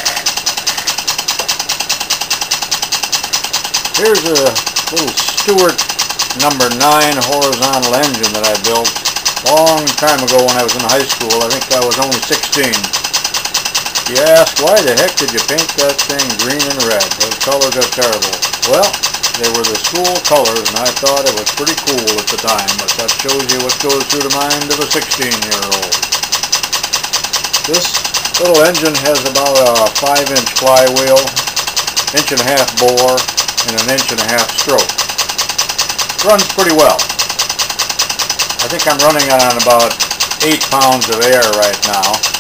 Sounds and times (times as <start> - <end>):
Engine: 0.0 - 42.4
Speech: 4.0 - 5.8, 6.4 - 12.9, 14.1 - 26.0, 27.7 - 31.4, 32.1 - 34.9, 36.2 - 37.0, 38.6 - 42.2.